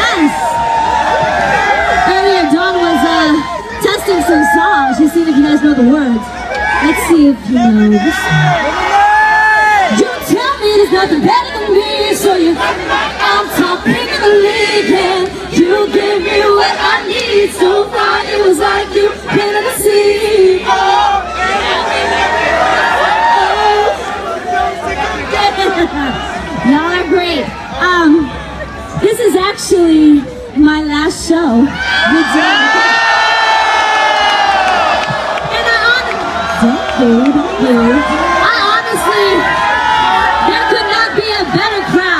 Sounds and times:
Female speech, woman speaking: 0.0 - 0.5, 2.1 - 8.6, 9.9 - 12.6, 25.3 - 28.3, 29.0 - 32.8, 35.5 - 39.4, 40.4 - 42.1.

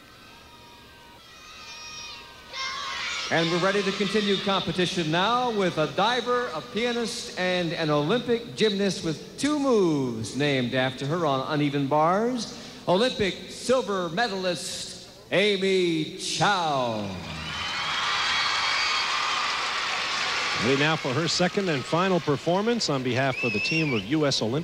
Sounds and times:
Speech: 3.3 - 17.2, 20.6 - 24.6.

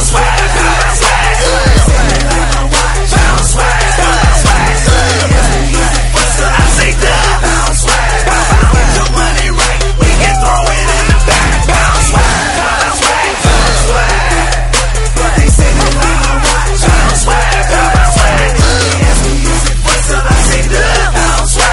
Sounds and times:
Pop music: 0.0 - 21.7.

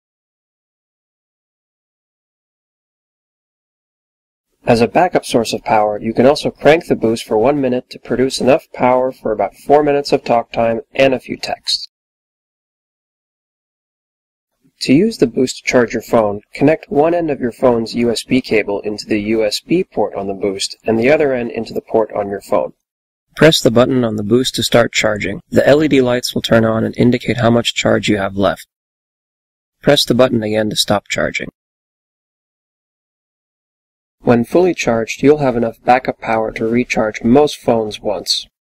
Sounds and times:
Speech: 4.6 - 11.9, 14.8 - 22.8, 23.4 - 28.8, 29.8 - 31.6, 34.2 - 38.6.

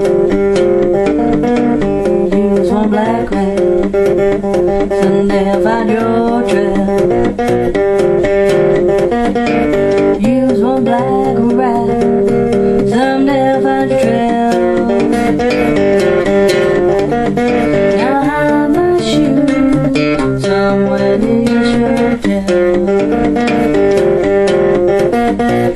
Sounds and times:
Acoustic guitar: 0.0 - 25.7
Strum: 0.0 - 25.7.

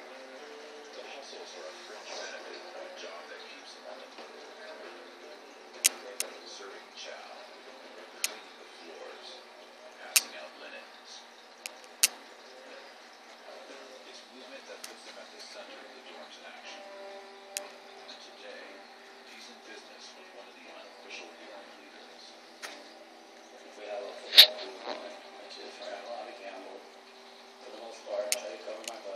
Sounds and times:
Speech: 0.9 - 11.3, 12.4 - 22.8, 23.5 - 26.9, 27.6 - 29.1.

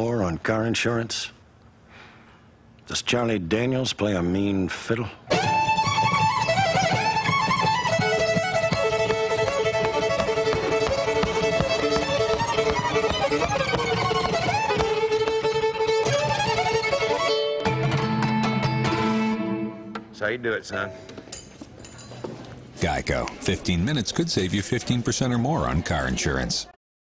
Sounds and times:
Speech: 0.0 - 1.4, 2.9 - 5.2, 22.8 - 26.8
Violin, fiddle: 5.3 - 17.8.

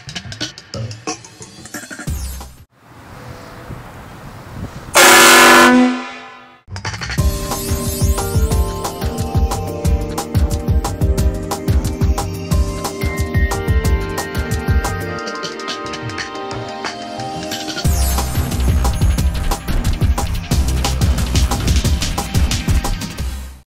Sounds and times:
Music: 0.0 - 2.7, 6.7 - 23.6.

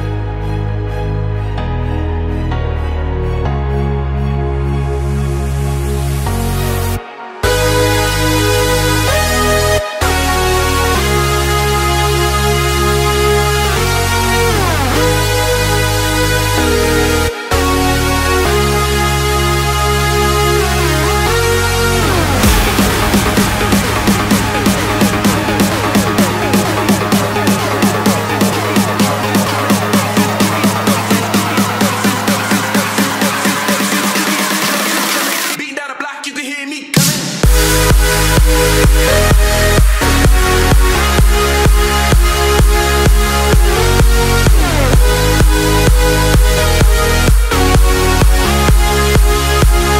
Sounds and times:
Music: 0.0 - 49.9.

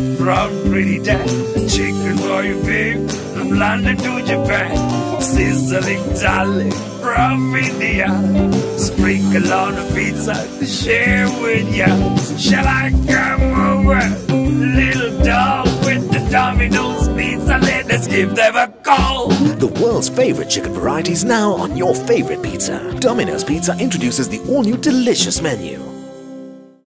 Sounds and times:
Music: 0.0 - 26.9
Speech: 0.7 - 1.3, 18.9 - 25.8.

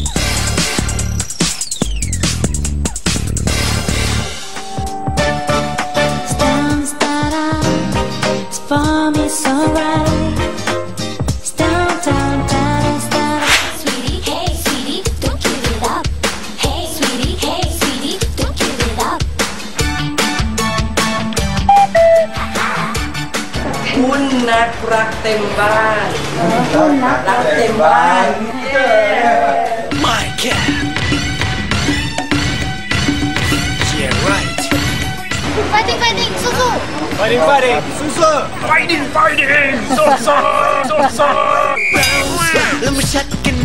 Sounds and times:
Music: 0.0 - 26.5, 28.8 - 38.3, 42.0 - 43.6.

